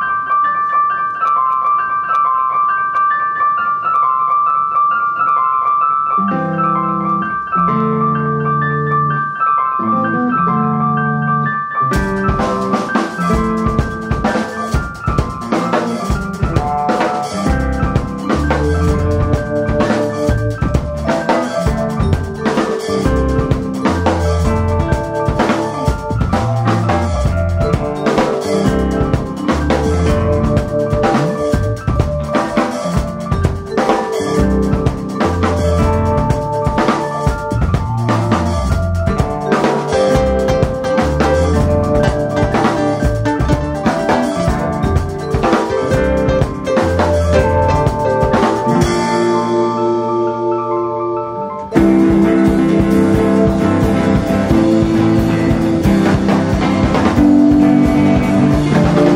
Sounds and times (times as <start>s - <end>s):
Music: 0.0s - 59.1s.